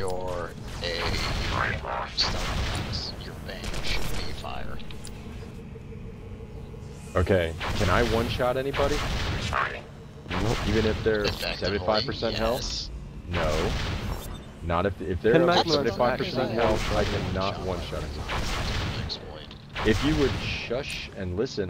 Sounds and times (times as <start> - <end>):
Speech: 0.0 - 4.8, 10.4 - 13.7, 14.7 - 21.6.